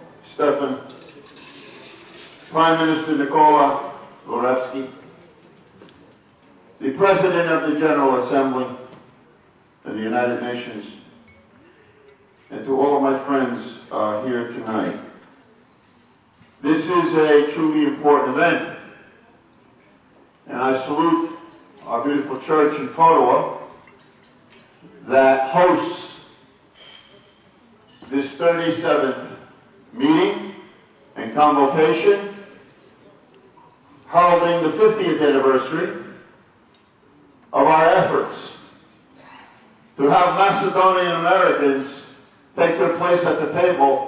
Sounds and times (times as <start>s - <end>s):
Male speech, man speaking: 0.0s - 1.0s, 2.5s - 5.0s, 6.8s - 8.9s, 9.9s - 11.1s, 12.5s - 15.2s, 16.6s - 19.0s, 20.5s - 23.7s, 25.0s - 26.4s, 28.0s - 32.6s, 34.1s - 36.3s, 37.6s - 38.7s, 40.0s - 44.0s
Narration, monologue: 0.0s - 39.0s, 39.7s - 44.0s.